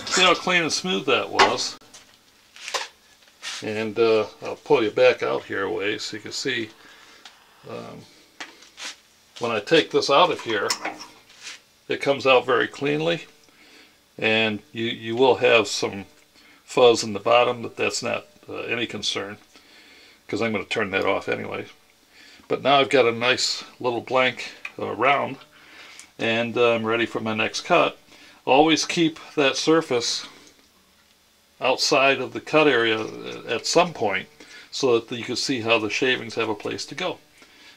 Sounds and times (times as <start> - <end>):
Speech: 0.0 - 1.8, 3.6 - 6.8, 7.7 - 8.1, 9.4 - 10.9, 11.9 - 13.3, 14.2 - 16.1, 16.7 - 19.5, 20.3 - 21.8, 22.5 - 25.4, 26.2 - 30.4, 31.6 - 37.2.